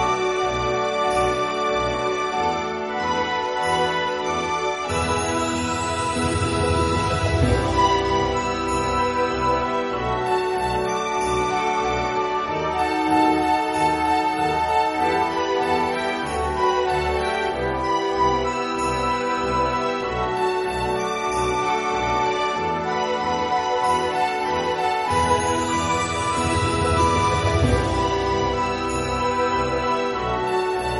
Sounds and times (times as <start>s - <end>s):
New-age music: 0.0s - 30.9s.